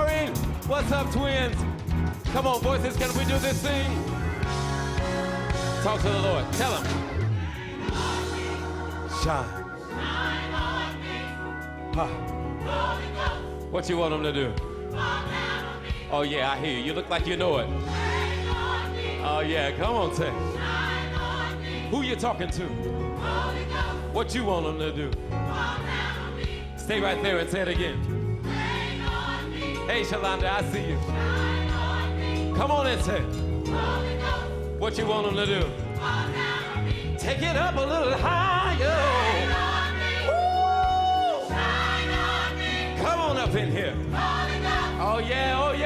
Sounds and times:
Music: 0.0 - 45.8.

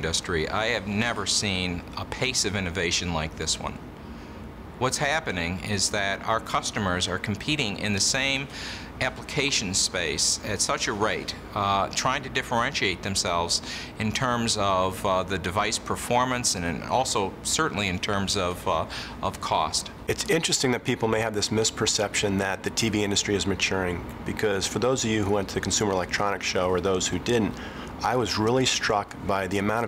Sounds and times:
Speech: 0.0 - 3.8, 4.8 - 29.8.

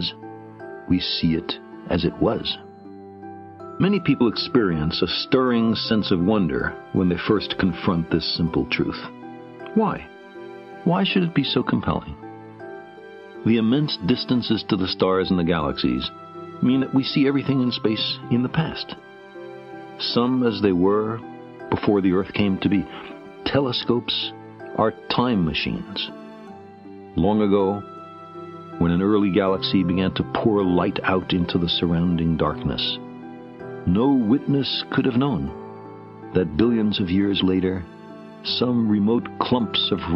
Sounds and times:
Music: 0.0 - 40.1
Male speech, man speaking: 0.9 - 2.6, 3.8 - 9.1, 9.7 - 10.1, 10.8 - 12.2, 13.4 - 19.0, 20.0 - 26.1, 27.2 - 27.8, 28.8 - 33.0, 33.9 - 35.6, 36.3 - 40.1.

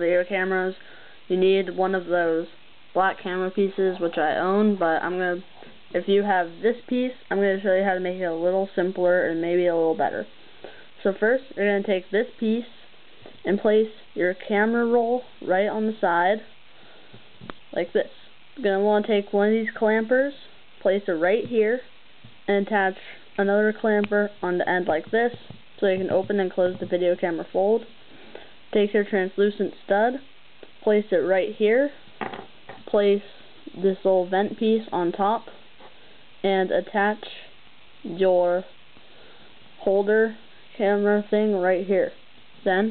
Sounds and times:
Speech: 0.0 - 10.3, 11.0 - 12.8, 13.4 - 16.5, 17.7 - 21.9, 22.5 - 27.9, 28.7 - 32.0, 32.8 - 35.6, 36.4 - 38.7, 39.8 - 42.9.

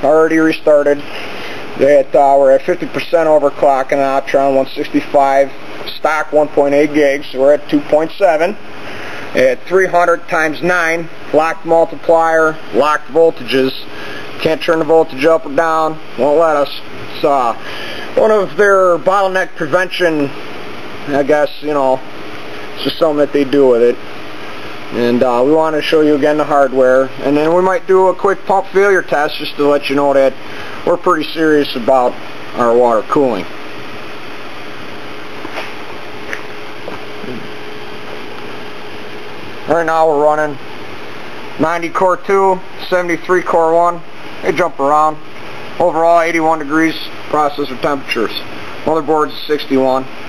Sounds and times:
Speech: 0.0 - 1.1, 1.8 - 8.6, 9.4 - 17.6, 18.2 - 20.4, 21.1 - 22.1, 22.8 - 24.0, 24.9 - 33.5, 37.3 - 37.5, 39.7 - 40.6, 41.6 - 45.2, 45.8 - 50.1.

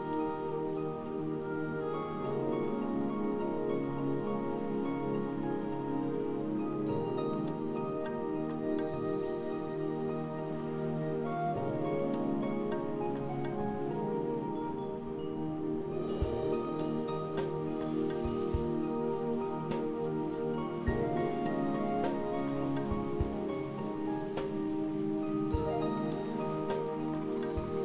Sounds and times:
Music: 0.0 - 27.8.

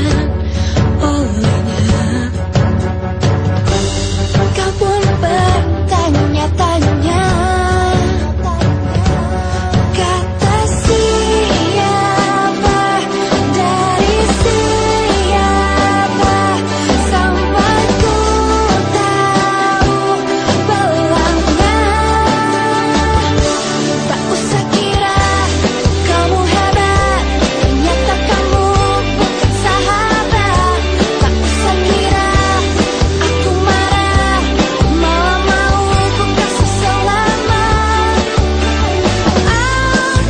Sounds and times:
Music: 0.0 - 40.2.

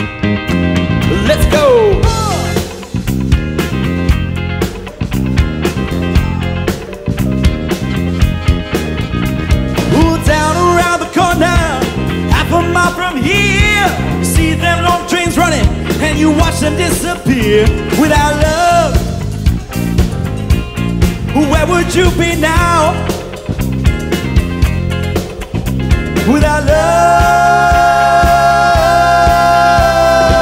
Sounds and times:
Vocal music: 0.0 - 4.0, 4.7 - 20.2, 20.8 - 23.8, 25.2 - 30.4.

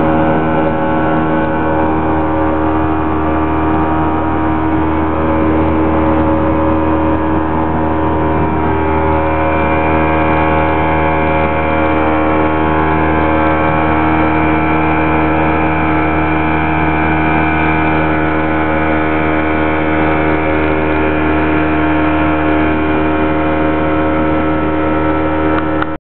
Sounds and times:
Motorboat, speedboat: 0.0 - 26.0.

